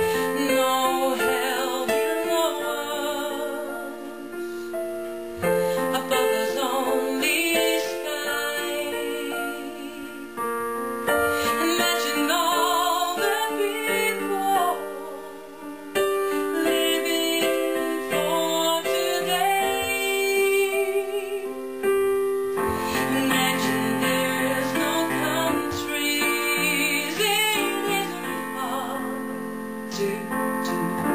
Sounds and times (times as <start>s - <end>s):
Female singing: 0.0s - 4.8s, 5.5s - 10.4s, 11.2s - 21.6s, 22.7s - 31.1s
Music: 0.0s - 31.1s.